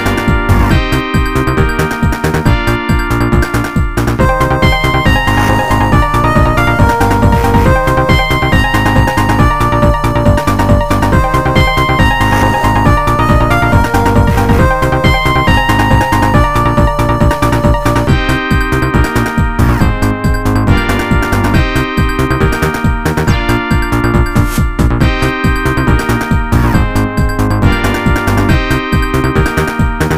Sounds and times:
Video game music: 0.0s - 30.1s.

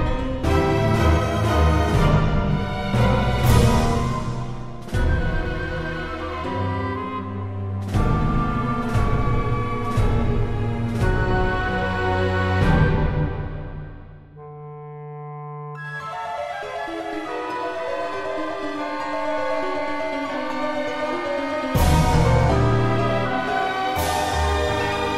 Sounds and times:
Orchestra: 0.0s - 25.1s.

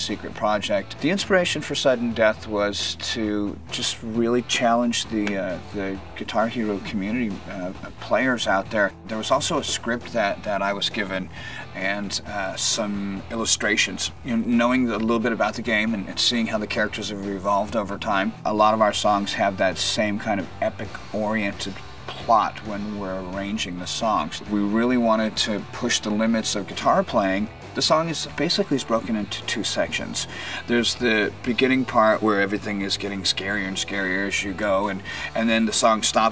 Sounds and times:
Speech: 0.0s - 36.3s.

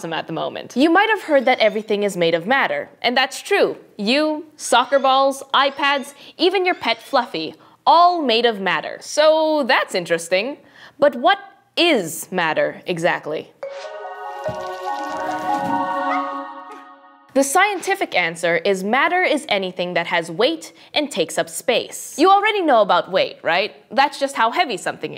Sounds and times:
Speech: 0.0s - 13.6s, 17.4s - 25.1s
Music: 13.6s - 17.3s.

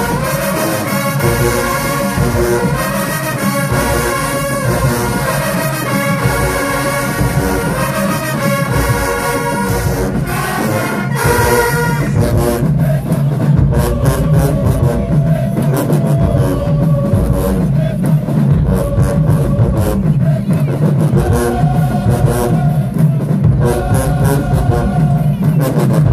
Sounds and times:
Music: 0.0s - 26.1s.

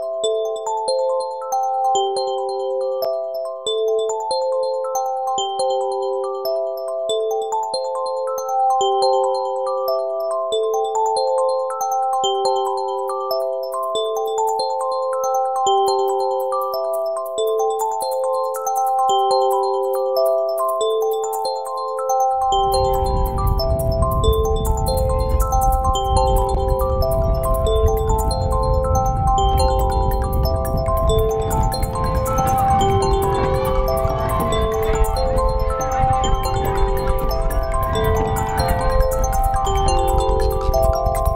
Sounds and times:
Music: 0.0s - 41.3s.

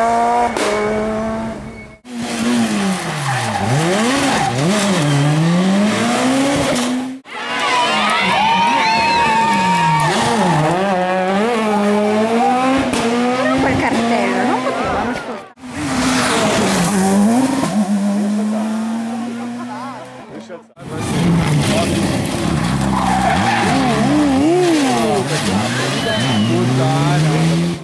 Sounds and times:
Speech: 13.4s - 15.5s, 24.6s - 27.7s.

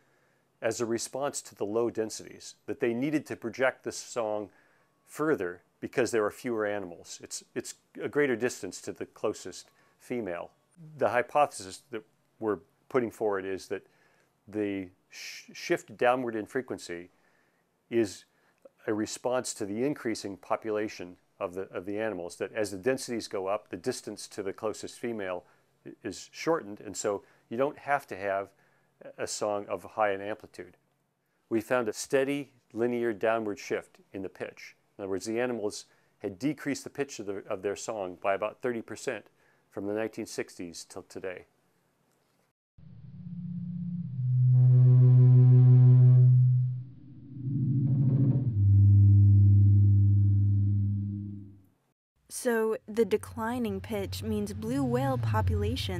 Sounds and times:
Music: 44.1s - 46.9s, 53.2s - 55.9s.

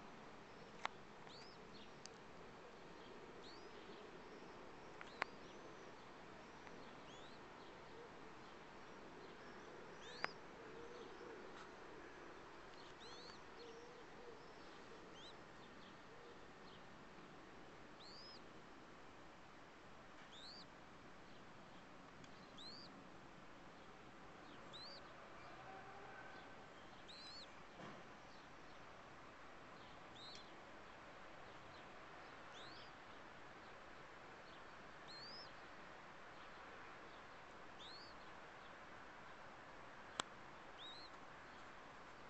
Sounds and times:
Bird: 0.5s - 16.9s, 18.0s - 18.5s, 20.2s - 20.7s, 22.2s - 23.0s, 23.8s - 29.0s, 29.8s - 30.6s, 31.4s - 33.0s, 34.4s - 35.6s, 36.4s - 38.8s, 40.1s - 42.3s.

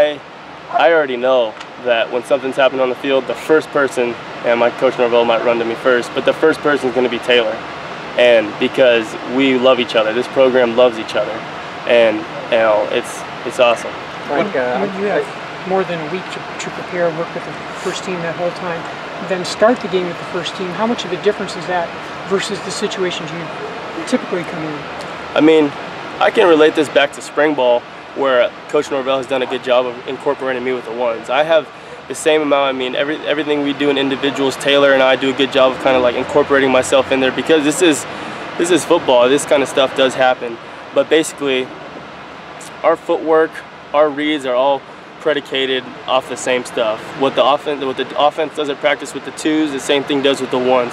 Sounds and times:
Speech: 0.0s - 7.6s, 8.2s - 24.8s, 25.4s - 41.7s, 42.6s - 50.9s.

